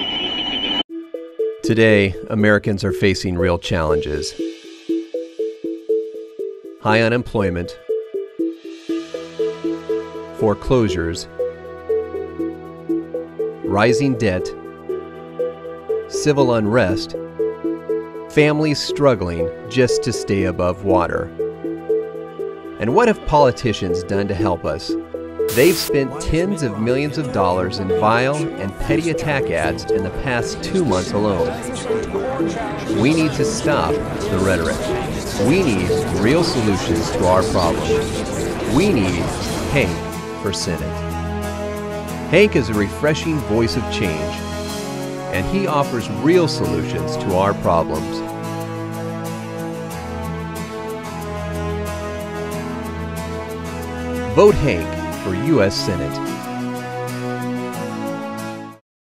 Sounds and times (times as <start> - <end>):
Music: 0.8 - 58.8
Speech: 1.7 - 4.4, 6.8 - 7.8, 10.4 - 11.3, 13.7 - 14.6, 16.1 - 17.2, 18.4 - 21.3, 22.8 - 24.9, 25.5 - 41.0, 42.3 - 44.4, 45.3 - 48.2, 54.3 - 56.2.